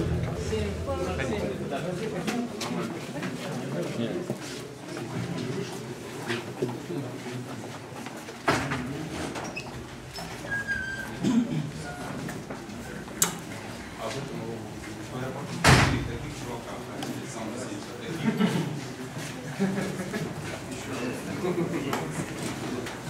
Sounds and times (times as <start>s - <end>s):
Speech: 11.2s - 23.0s.